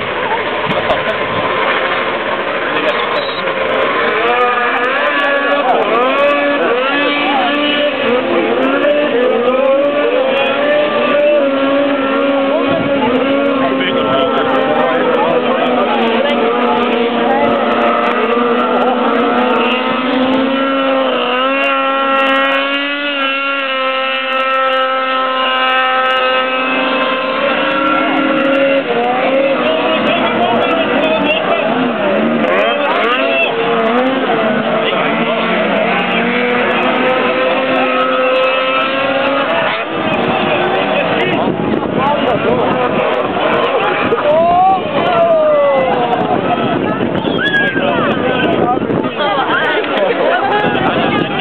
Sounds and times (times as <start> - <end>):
Speech: 2.6 - 20.7, 27.0 - 51.4.